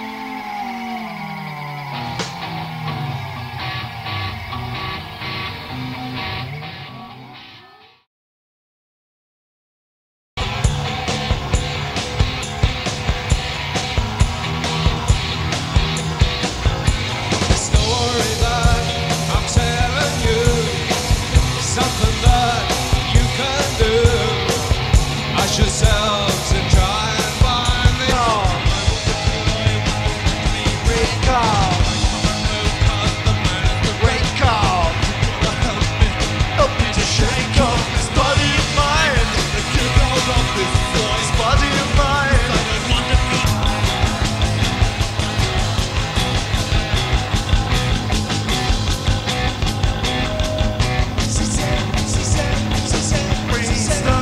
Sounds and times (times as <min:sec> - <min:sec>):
Music: 0:00.0 - 0:08.1, 0:10.4 - 0:54.2.